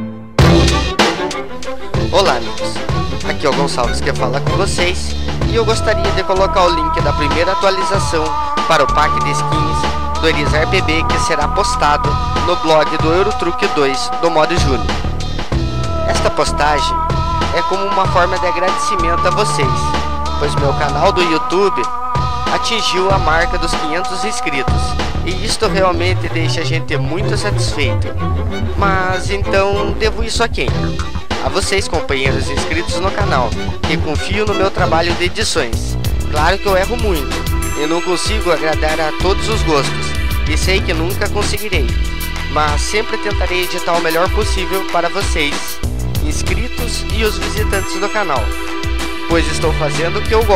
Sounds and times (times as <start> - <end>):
Music: 0.0 - 50.5
Speech: 2.0 - 14.9, 16.1 - 21.9, 22.5 - 28.1, 28.8 - 48.6, 49.3 - 50.5.